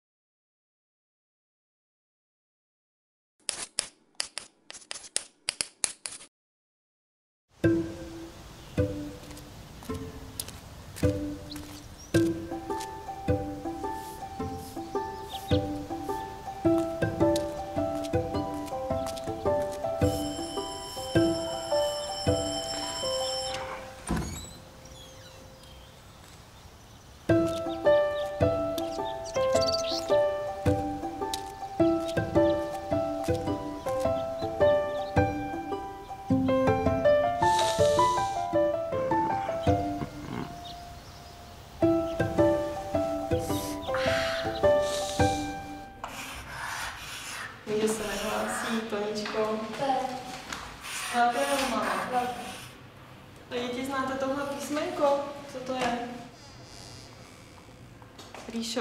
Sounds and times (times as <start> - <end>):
Outside, rural or natural: 7.5 - 46.0
Music: 7.6 - 25.0, 27.3 - 46.1.